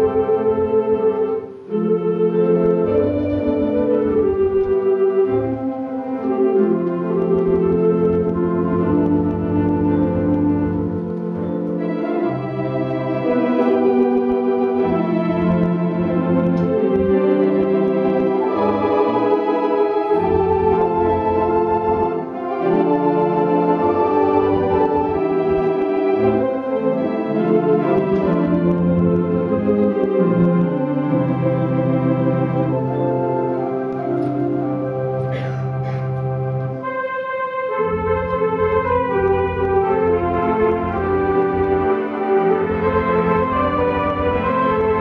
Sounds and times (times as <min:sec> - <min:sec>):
Electronic organ: 0:00.0 - 0:45.0.